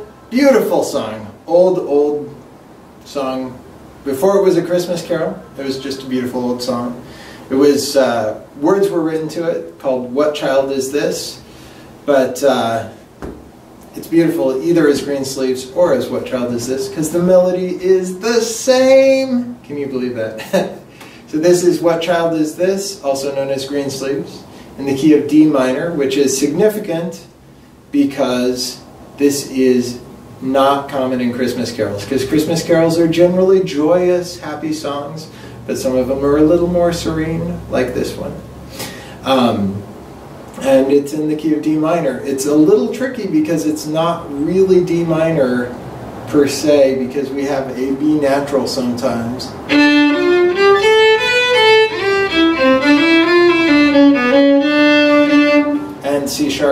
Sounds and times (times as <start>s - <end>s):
Speech: 0.0s - 2.4s, 3.0s - 11.4s, 12.0s - 13.0s, 13.9s - 38.5s, 39.2s - 39.9s, 40.6s - 49.6s, 56.0s - 56.7s.